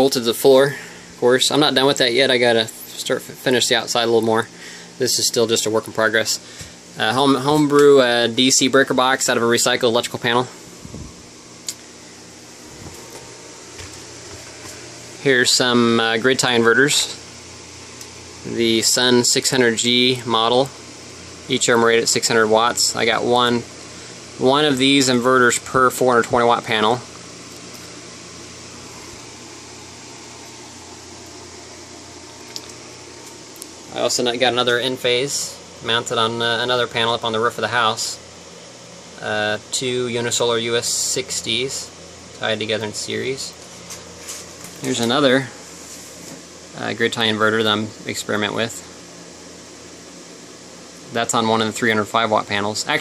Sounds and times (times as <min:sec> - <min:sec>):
Speech: 0:00.0 - 0:06.4, 0:07.0 - 0:10.6, 0:15.2 - 0:17.2, 0:18.4 - 0:20.8, 0:21.5 - 0:23.7, 0:24.4 - 0:27.1, 0:33.9 - 0:38.2, 0:39.2 - 0:43.6, 0:44.8 - 0:45.6, 0:46.8 - 0:48.9, 0:51.1 - 0:53.0.